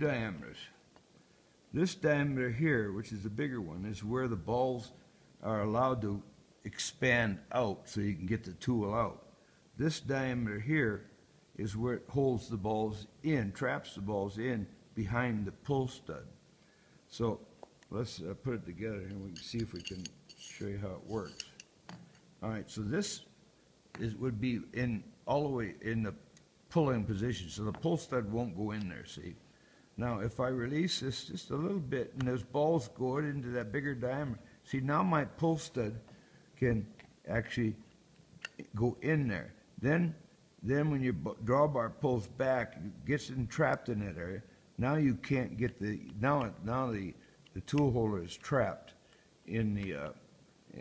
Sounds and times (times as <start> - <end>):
Speech: 0.0 - 0.8, 1.7 - 16.4, 17.1 - 21.6, 22.4 - 23.3, 24.0 - 29.4, 30.0 - 37.9, 38.5 - 50.8.